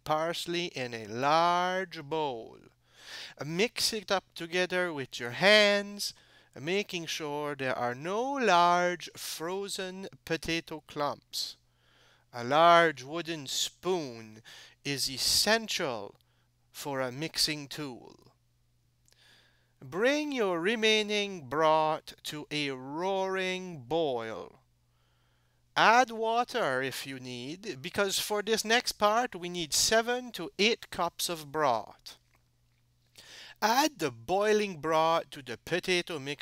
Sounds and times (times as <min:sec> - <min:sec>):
Narration, monologue: 0:00.0 - 0:36.4.